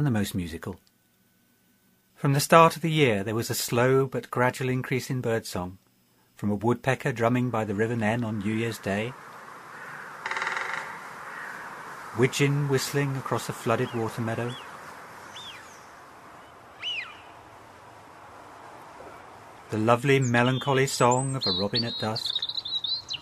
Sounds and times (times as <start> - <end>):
Speech: 0.0 - 0.9, 2.2 - 5.8, 6.4 - 9.2, 12.2 - 14.6, 19.7 - 22.4.